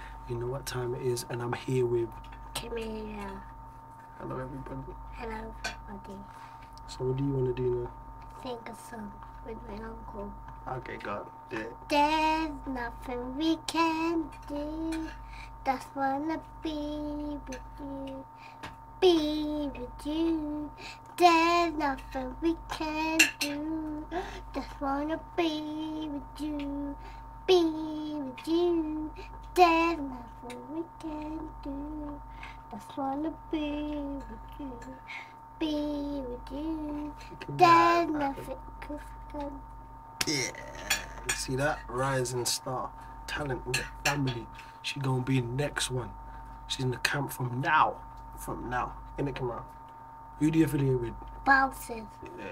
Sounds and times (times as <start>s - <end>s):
Child singing: 11.9s - 18.3s, 19.0s - 35.0s, 35.6s - 39.6s.